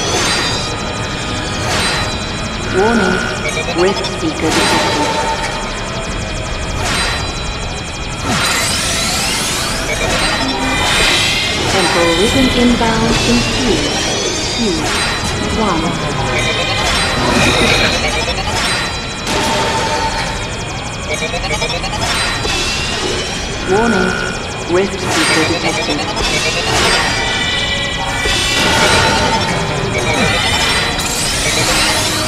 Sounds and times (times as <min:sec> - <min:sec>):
Speech: 0:02.8 - 0:05.2, 0:11.8 - 0:14.0, 0:14.6 - 0:14.9, 0:15.6 - 0:16.5, 0:23.7 - 0:26.1.